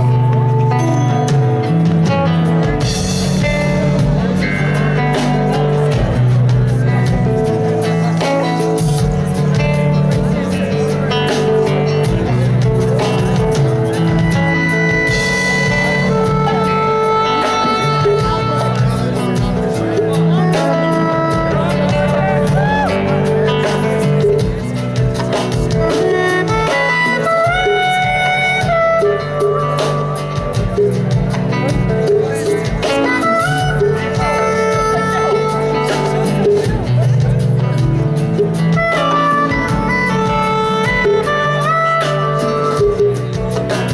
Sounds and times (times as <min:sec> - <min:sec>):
Bluegrass: 0:00.0 - 0:43.9
Speech: 0:00.0 - 0:43.9.